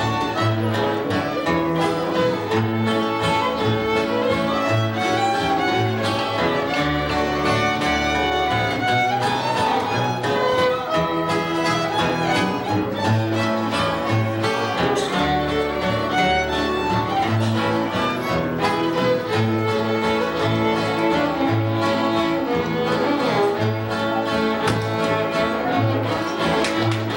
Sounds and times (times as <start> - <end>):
Violin, fiddle: 0.0 - 27.1.